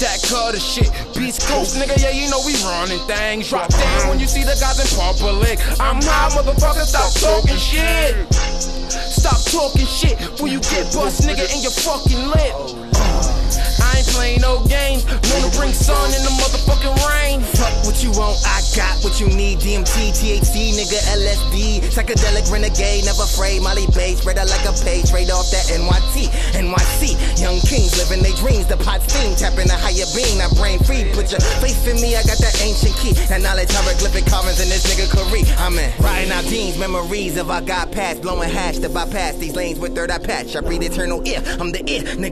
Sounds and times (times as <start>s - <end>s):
Music: 0.0s - 42.3s.